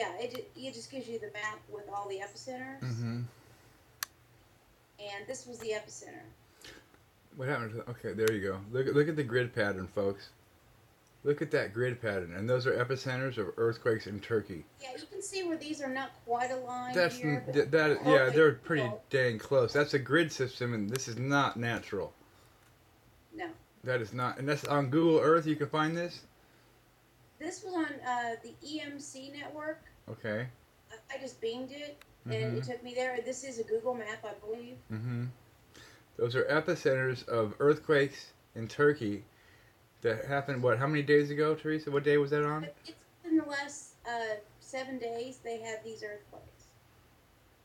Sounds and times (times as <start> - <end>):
Speech: 0.0 - 3.3, 5.0 - 6.3, 7.4 - 10.3, 11.3 - 22.1, 23.4 - 26.2, 27.4 - 35.3, 36.2 - 39.2, 40.0 - 46.6.